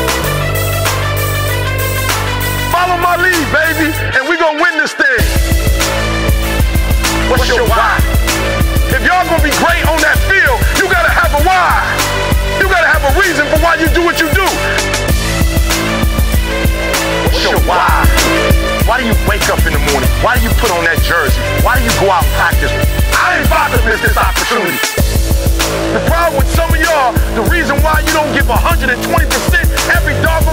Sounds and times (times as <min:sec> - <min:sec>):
Music: 0:00.0 - 0:30.5.